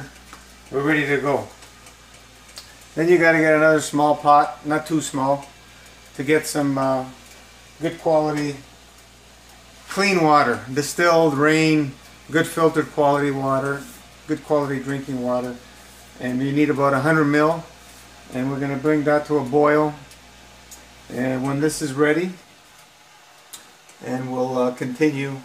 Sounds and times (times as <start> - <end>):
Speech: 0.7 - 1.6, 3.0 - 5.5, 6.2 - 7.2, 7.8 - 8.7, 9.9 - 15.6, 16.2 - 17.7, 18.3 - 20.1, 21.1 - 22.4, 24.0 - 25.4.